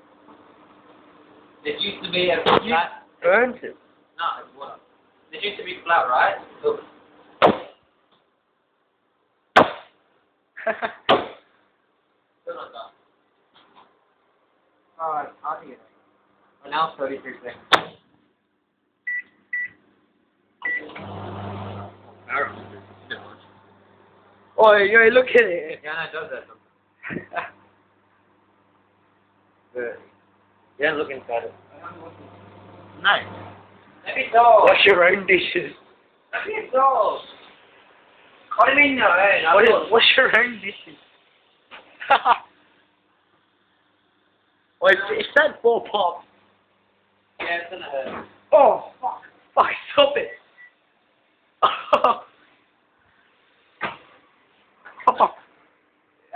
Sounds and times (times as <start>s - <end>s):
Speech: 1.6s - 6.9s, 12.5s - 13.0s, 15.0s - 15.9s, 16.6s - 17.6s, 22.3s - 23.4s, 24.6s - 26.6s, 30.8s - 32.2s, 34.1s - 35.8s, 36.4s - 37.4s, 38.5s - 41.0s, 44.8s - 46.3s, 47.4s - 50.4s.